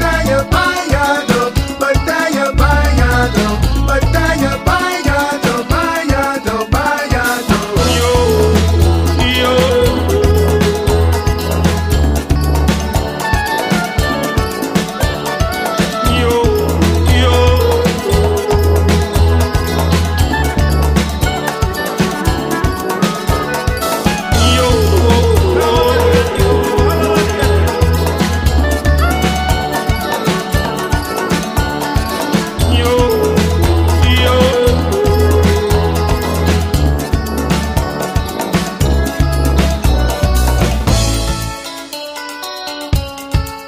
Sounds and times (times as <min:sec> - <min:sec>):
Music: 0:00.0 - 0:43.6.